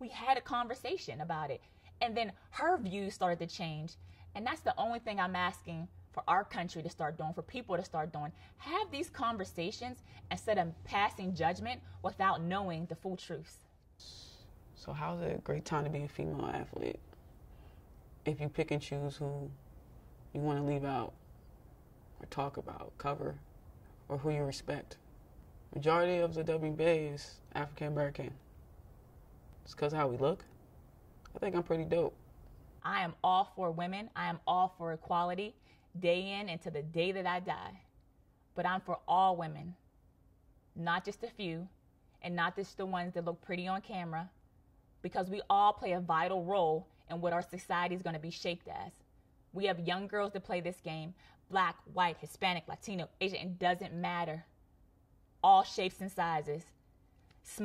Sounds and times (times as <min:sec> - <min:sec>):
Female speech, woman speaking: 0:00.0 - 0:13.7, 0:32.8 - 0:37.9, 0:38.6 - 0:39.8, 0:40.8 - 0:44.4, 0:45.0 - 0:49.0, 0:49.6 - 0:54.5, 0:55.4 - 0:56.8.